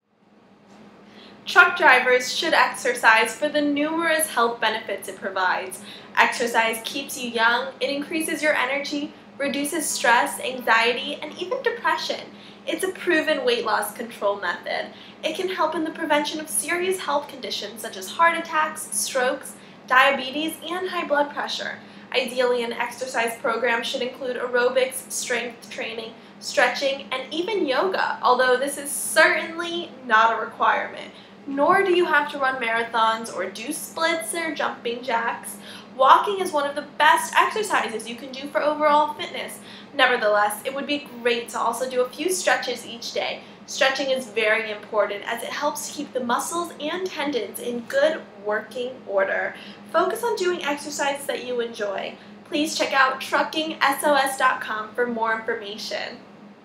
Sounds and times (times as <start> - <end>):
Speech: 1.5 - 56.2.